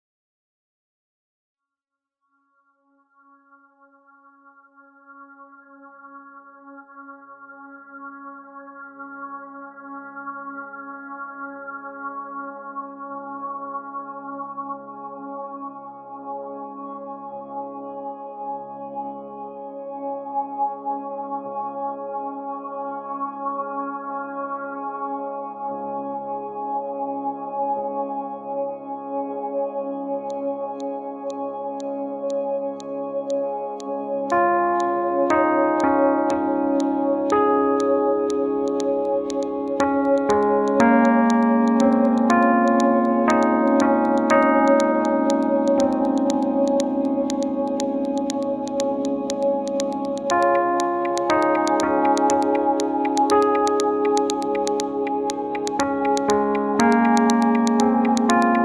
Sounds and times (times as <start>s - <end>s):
Music: 2.4s - 58.6s.